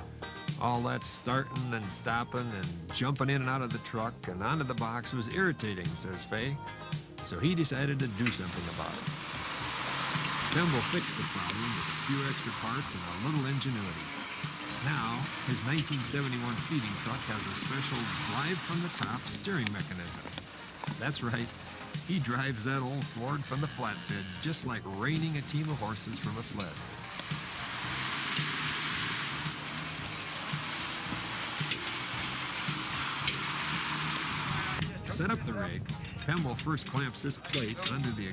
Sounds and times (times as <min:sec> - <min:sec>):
Music: 0:00.0 - 0:38.3
Speech: 0:00.6 - 0:06.6, 0:07.2 - 0:09.1, 0:10.5 - 0:14.1, 0:14.8 - 0:20.3, 0:20.9 - 0:26.8, 0:34.8 - 0:38.3.